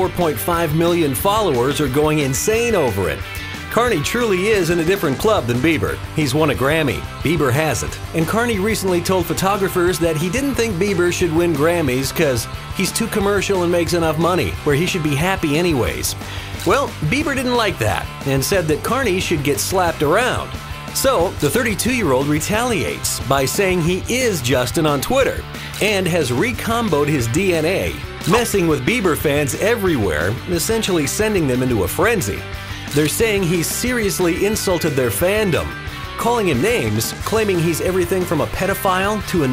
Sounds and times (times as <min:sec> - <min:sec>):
Music: 0:00.0 - 0:39.5
Speech: 0:00.0 - 0:39.5.